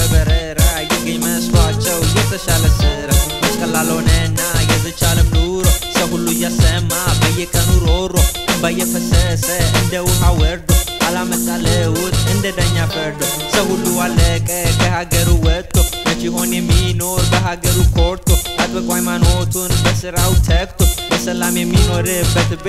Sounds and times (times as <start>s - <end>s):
Exciting music: 0.0s - 15.2s.